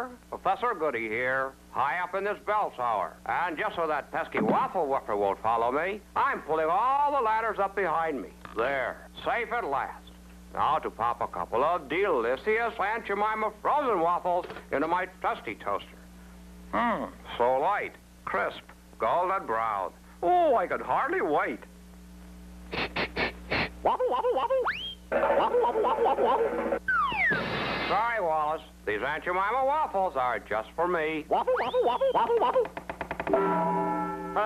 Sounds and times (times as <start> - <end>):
Speech: 0.0 - 16.0, 16.7 - 21.7, 27.9 - 32.6.